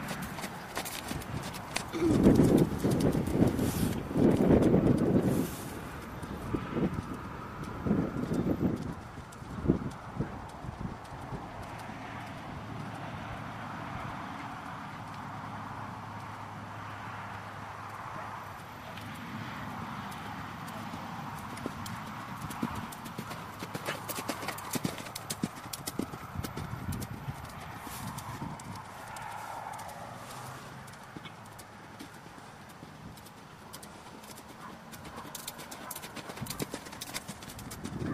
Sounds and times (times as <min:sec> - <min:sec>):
Clip-clop: 0:00.0 - 0:38.1.